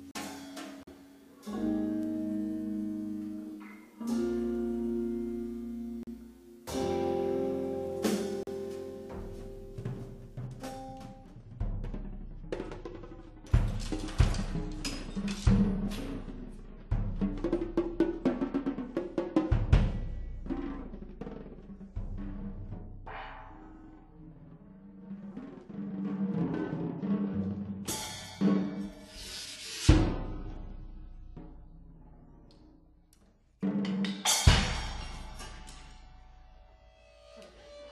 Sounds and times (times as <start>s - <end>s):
Drum roll: 0.0s - 2.0s, 6.0s - 32.4s, 33.6s - 36.5s
Timpani: 0.0s - 32.6s, 33.6s - 36.6s.